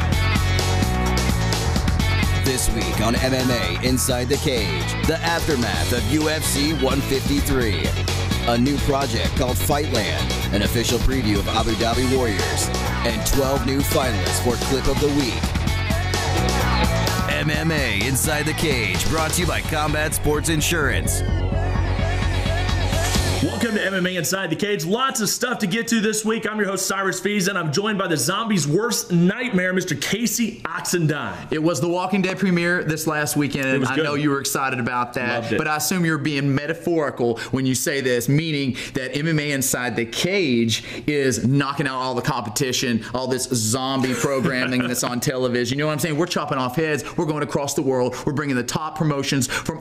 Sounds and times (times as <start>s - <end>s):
Speech: 2.4s - 7.9s, 8.5s - 15.4s, 17.3s - 21.2s, 23.4s - 49.8s.